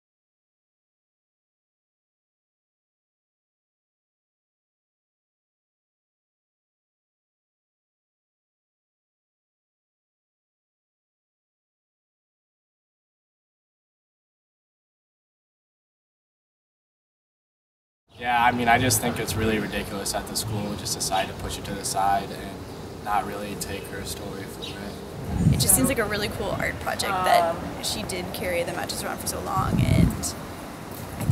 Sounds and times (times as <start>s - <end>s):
Speech: 18.2s - 30.4s.